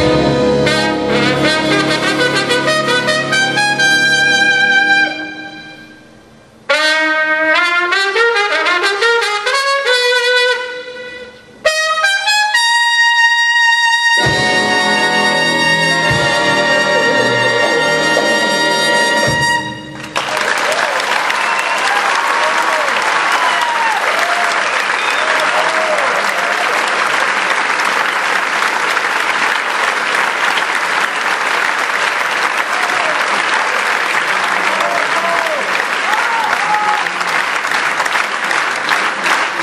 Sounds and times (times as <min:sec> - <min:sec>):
Music: 0:00.0 - 0:20.3
Applause: 0:20.0 - 0:39.6.